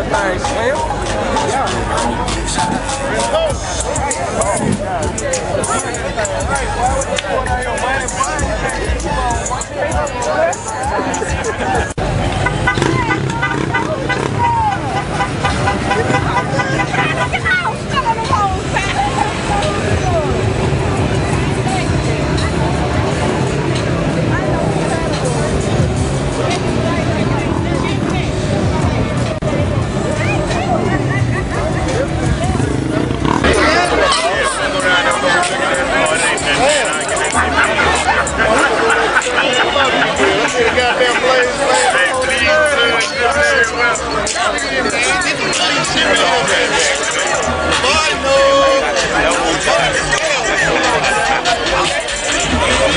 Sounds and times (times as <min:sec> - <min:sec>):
Music: 0:00.0 - 0:52.9
Speech: 0:00.0 - 0:52.9.